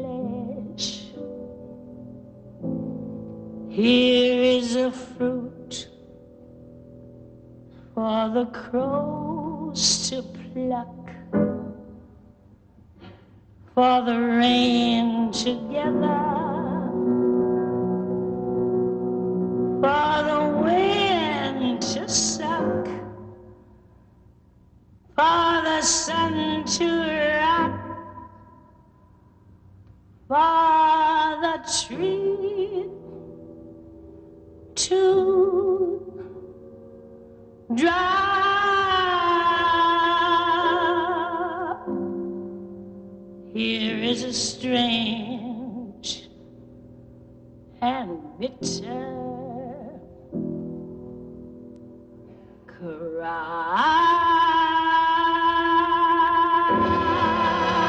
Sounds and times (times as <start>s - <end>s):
Music: 0.0s - 57.8s.